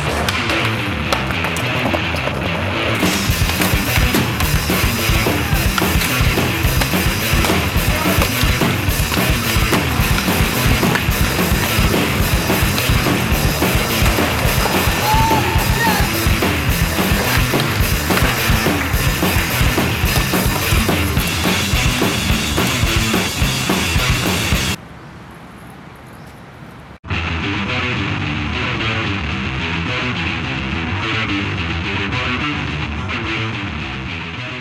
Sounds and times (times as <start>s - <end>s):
Skateboard: 0.0s - 24.7s
Music: 0.0s - 24.8s, 27.1s - 34.6s.